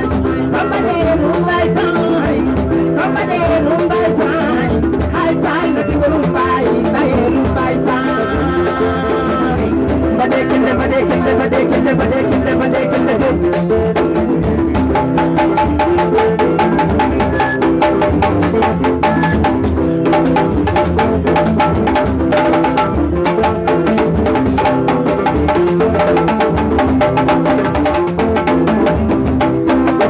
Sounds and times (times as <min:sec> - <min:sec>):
Drum: 0:00.0 - 0:30.1
Folk music: 0:00.0 - 0:30.1.